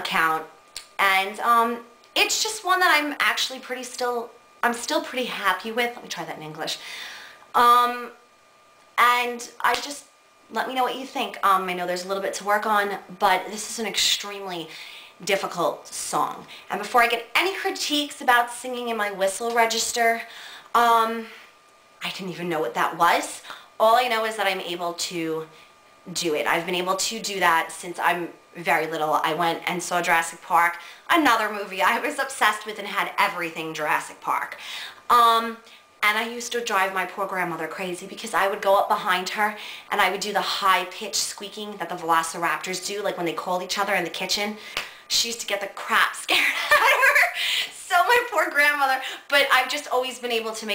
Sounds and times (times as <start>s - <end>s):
Speech: 0.0s - 6.8s, 7.6s - 8.2s, 9.0s - 21.4s, 22.0s - 50.7s.